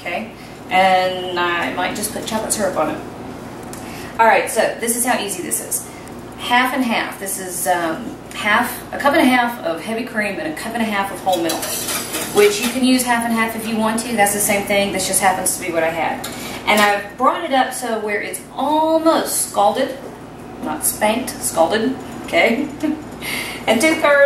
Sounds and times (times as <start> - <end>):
Stir: 11.3 - 12.8.